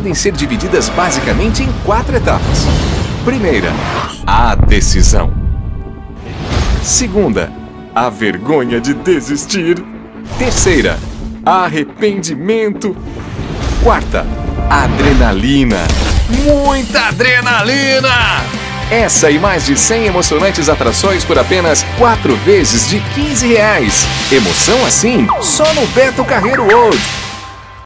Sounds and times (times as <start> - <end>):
Speech: 0.0 - 2.7, 3.3 - 5.3, 6.8 - 9.8, 10.4 - 13.0, 13.8 - 27.1
Music: 0.0 - 27.8.